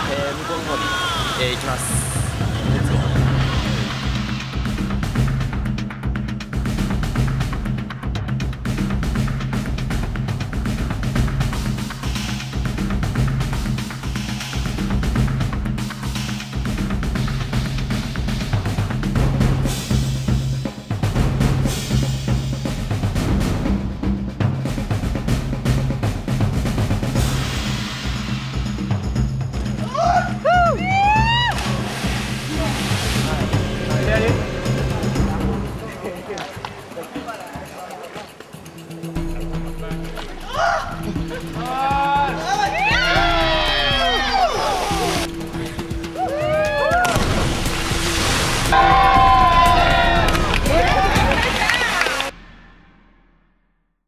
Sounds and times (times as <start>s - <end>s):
Music: 0.0s - 54.0s.